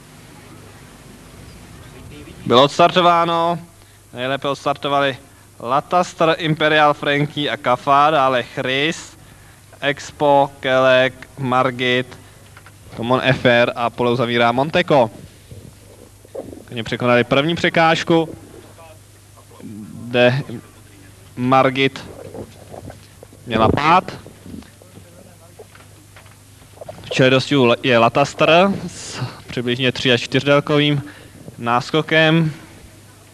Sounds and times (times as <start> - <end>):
Speech: 1.8 - 9.2, 9.8 - 12.2, 12.9 - 15.2, 16.7 - 25.8, 27.0 - 33.3.